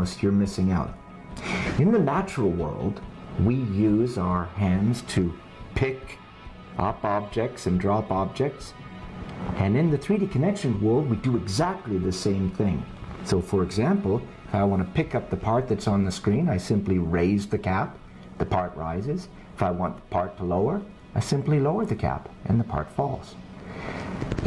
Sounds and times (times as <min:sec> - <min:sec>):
Speech: 0:00.0 - 0:01.0, 0:01.7 - 0:06.2, 0:06.8 - 0:08.8, 0:09.6 - 0:23.4
Music: 0:00.0 - 0:24.4.